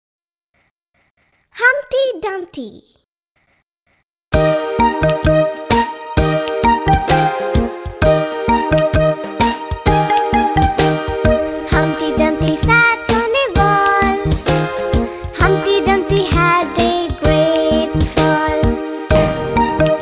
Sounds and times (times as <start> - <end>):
Child speech, kid speaking: 1.6 - 3.0
Music: 4.4 - 20.0.